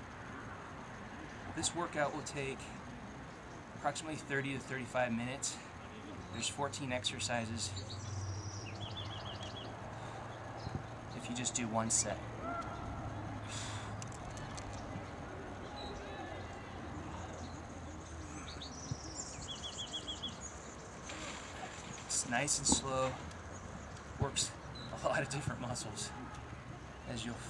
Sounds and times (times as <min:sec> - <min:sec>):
Outside, rural or natural: 0:00.0 - 0:27.4
Speech: 0:06.4 - 0:07.8, 0:11.2 - 0:12.2, 0:24.2 - 0:26.2.